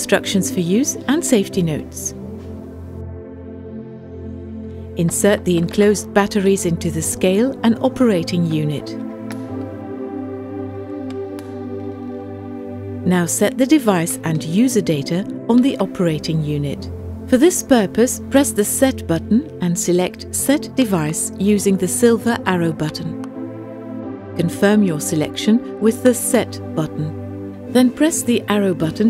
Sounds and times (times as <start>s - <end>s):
Speech: 0.0s - 2.2s, 5.0s - 9.0s, 13.1s - 23.2s, 24.4s - 27.2s, 27.8s - 29.1s
Music: 0.0s - 29.1s.